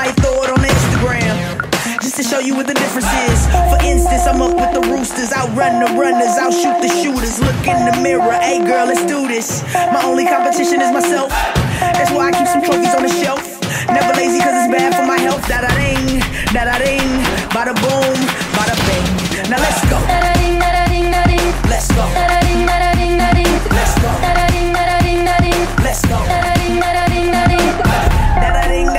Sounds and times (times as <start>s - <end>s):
Music: 0.0s - 28.9s.